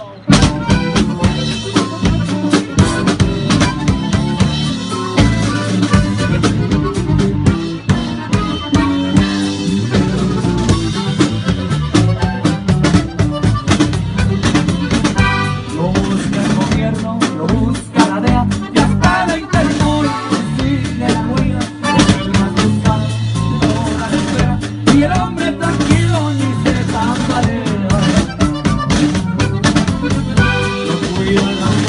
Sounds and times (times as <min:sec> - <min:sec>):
Music: 0:00.0 - 0:31.8.